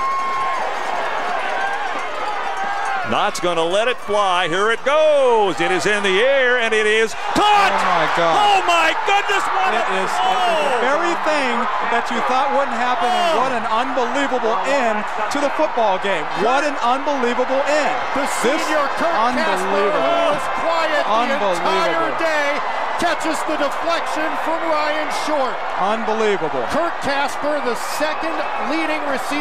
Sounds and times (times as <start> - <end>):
Speech: 3.1 - 29.4.